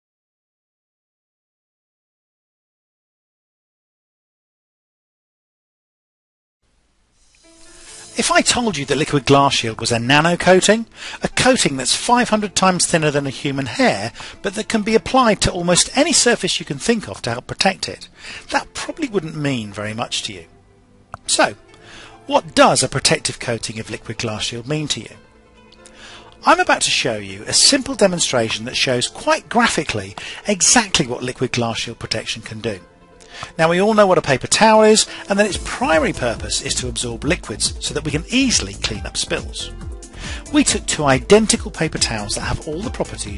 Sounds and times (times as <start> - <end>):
Music: 6.8 - 43.3
Speech: 8.2 - 20.5, 21.2 - 21.6, 22.3 - 25.2, 26.4 - 32.9, 33.6 - 39.7, 40.5 - 43.3.